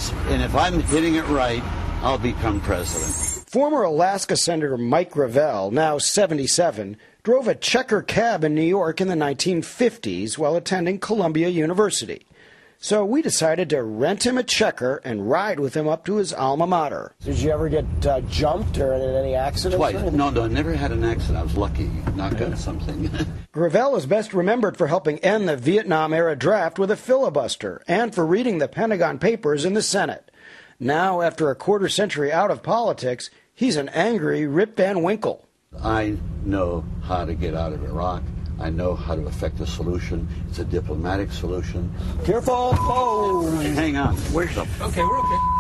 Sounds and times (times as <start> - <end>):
Speech: 0.0 - 12.2, 12.8 - 30.2, 30.8 - 45.4.